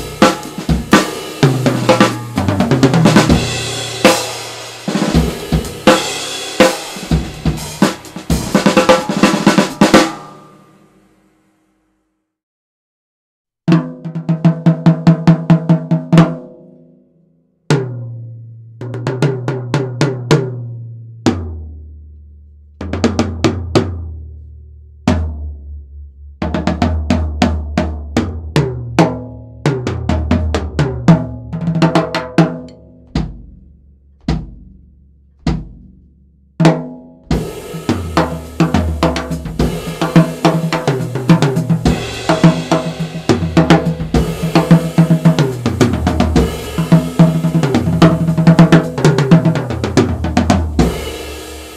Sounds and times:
Bass drum: 0:00.0 - 0:10.3, 0:25.0 - 0:51.7
Snare drum: 0:00.0 - 0:10.4, 0:35.5 - 0:35.8, 0:36.6 - 0:51.7
Drum kit: 0:00.0 - 0:11.1, 0:13.7 - 0:16.6, 0:18.8 - 0:21.8, 0:22.8 - 0:24.3, 0:26.4 - 0:51.7.

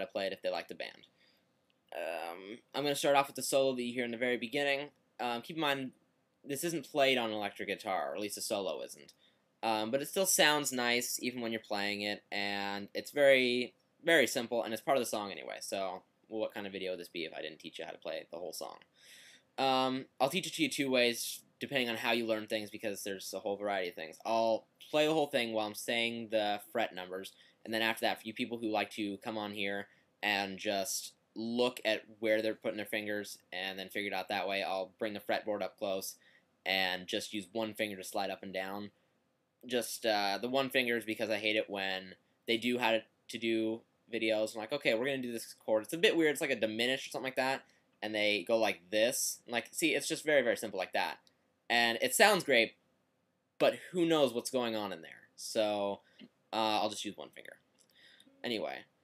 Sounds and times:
Speech: 0:00.0 - 0:01.0, 0:01.9 - 0:05.9, 0:06.5 - 0:18.8, 0:19.6 - 0:38.9, 0:39.7 - 0:52.7, 0:53.6 - 0:57.6, 0:58.4 - 0:58.9.

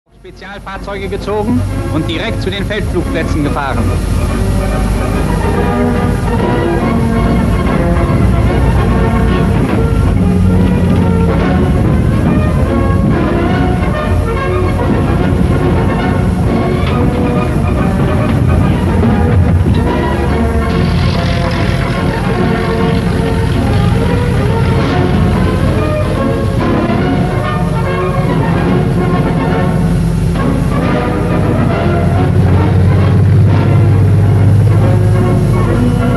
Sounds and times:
Train: 0:00.1 - 0:36.1.

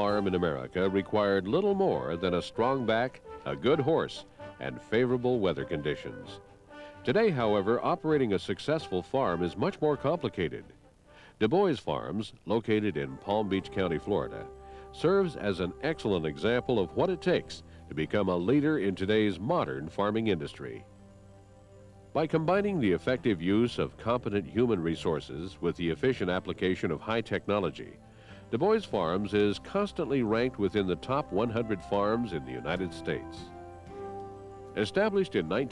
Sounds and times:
Speech: 0:00.0 - 0:06.4, 0:07.0 - 0:10.8, 0:11.4 - 0:20.8, 0:22.2 - 0:33.5, 0:34.8 - 0:35.7
Music: 0:00.0 - 0:35.7.

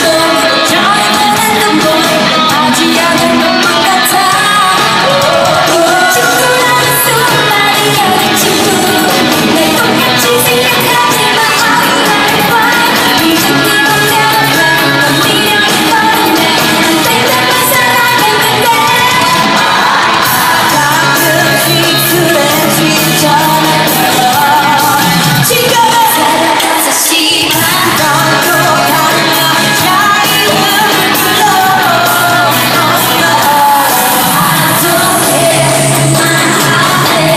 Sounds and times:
Inside, large room or hall: 0:00.0 - 0:37.3
Pop music: 0:00.0 - 0:37.3
Singing: 0:00.0 - 0:37.3.

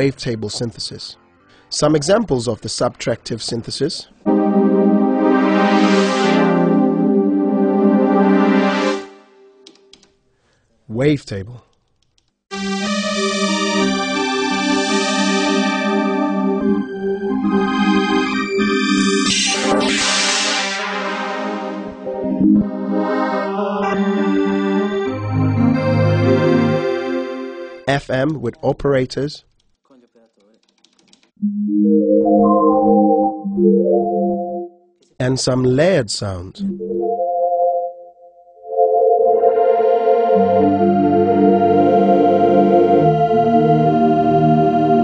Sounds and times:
Speech: 0:00.0 - 0:04.2, 0:10.9 - 0:11.7, 0:27.9 - 0:30.6, 0:35.2 - 0:36.6
Piano: 0:04.2 - 0:09.9, 0:12.5 - 0:27.9, 0:36.7 - 0:45.0.

